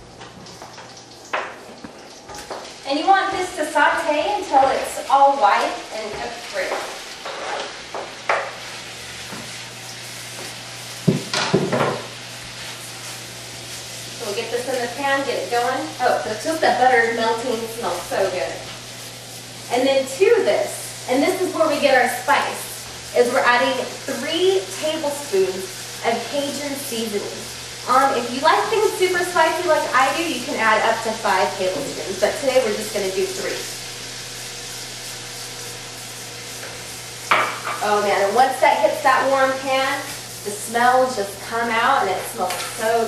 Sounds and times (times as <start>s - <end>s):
Speech: 2.9s - 6.8s, 14.2s - 18.7s, 19.7s - 33.7s, 37.8s - 43.0s.